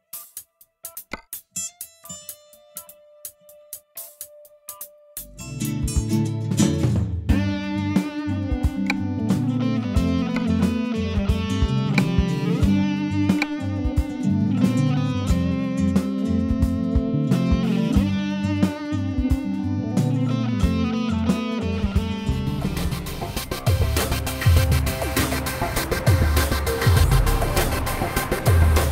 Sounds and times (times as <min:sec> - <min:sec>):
Music: 0:00.0 - 0:28.9.